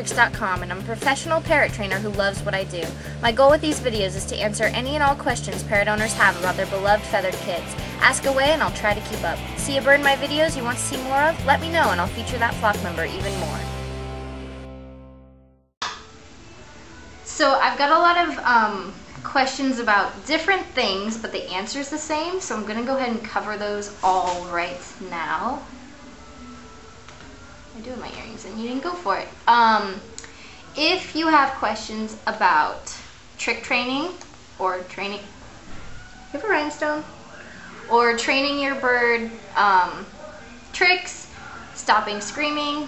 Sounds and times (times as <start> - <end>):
Speech: 0.0 - 13.8, 17.3 - 25.8, 27.8 - 30.1, 30.7 - 35.3, 36.4 - 37.2, 37.9 - 42.8.